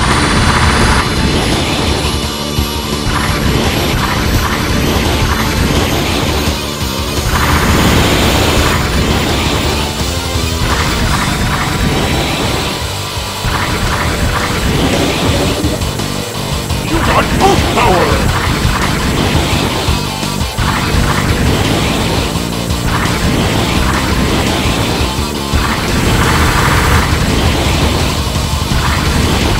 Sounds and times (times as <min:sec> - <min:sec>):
Music: 0:00.0 - 0:29.5
Speech: 0:16.9 - 0:18.3.